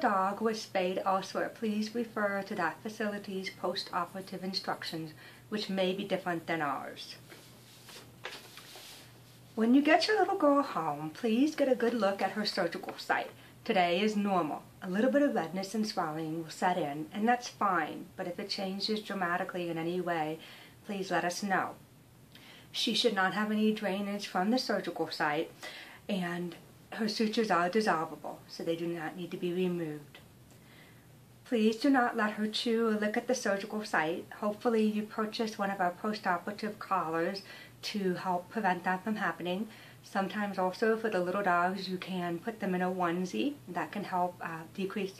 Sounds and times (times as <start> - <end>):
Speech: 0.0 - 7.2, 9.6 - 21.8, 22.8 - 30.2, 31.5 - 45.1.